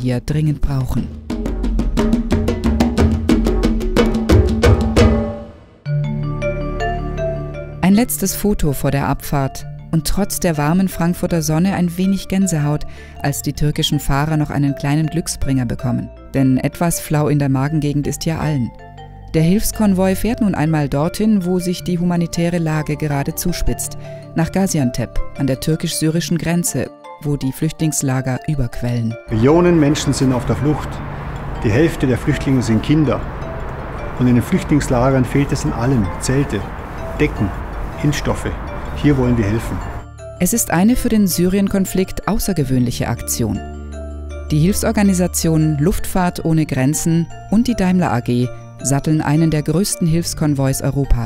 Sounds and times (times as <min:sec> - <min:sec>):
Speech: 0:00.0 - 0:01.1, 0:07.8 - 0:18.7, 0:19.4 - 0:31.0, 0:31.6 - 0:33.2, 0:34.2 - 0:36.6, 0:37.2 - 0:39.8, 0:40.4 - 0:43.6, 0:44.5 - 0:51.2
Music: 0:00.0 - 0:51.2.